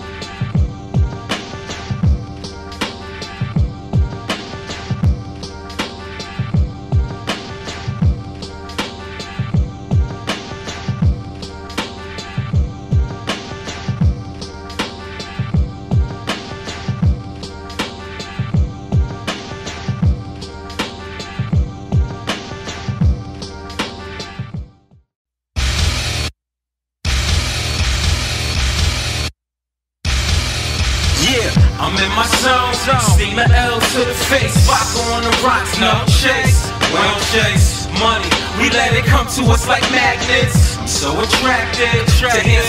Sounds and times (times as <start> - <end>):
Rhythm and blues: 0.0 - 24.6, 30.1 - 42.6.